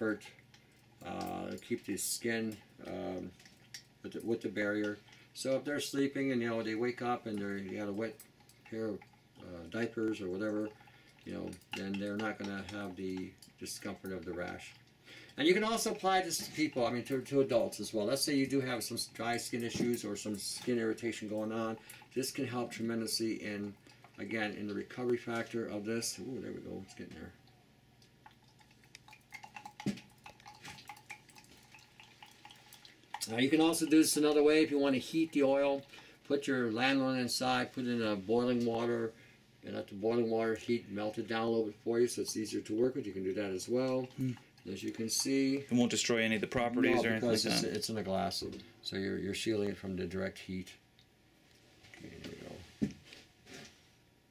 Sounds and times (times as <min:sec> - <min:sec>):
Speech: 0:01.0 - 0:03.3, 0:04.1 - 0:10.7, 0:11.3 - 0:14.8, 0:15.4 - 0:27.4, 0:33.2 - 0:50.8, 0:52.0 - 0:52.6.